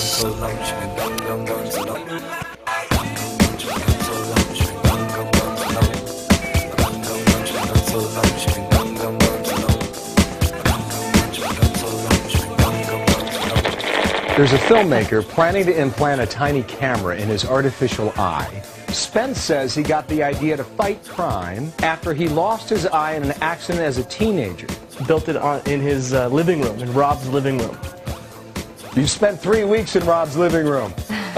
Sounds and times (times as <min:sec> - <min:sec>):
Music: 0:00.0 - 0:31.3
Speech: 0:14.4 - 0:27.8, 0:29.0 - 0:31.0.